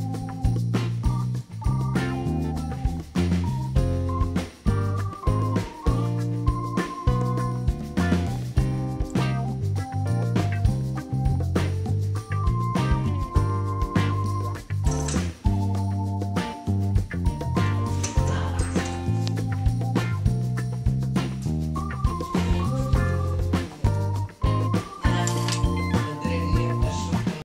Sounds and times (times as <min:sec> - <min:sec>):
Music: 0:00.0 - 0:27.4
Speech: 0:25.0 - 0:27.4.